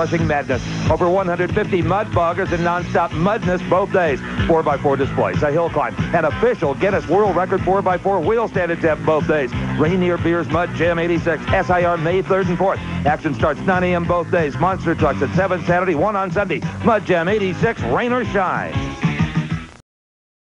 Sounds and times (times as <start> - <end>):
Speech: 0.0 - 18.8
Music: 0.0 - 19.8.